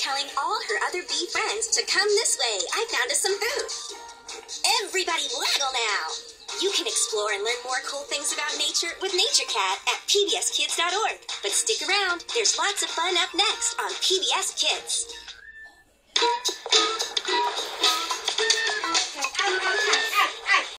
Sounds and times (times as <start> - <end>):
Speech: 0.0 - 3.7, 4.7 - 15.1
Music: 0.0 - 20.7.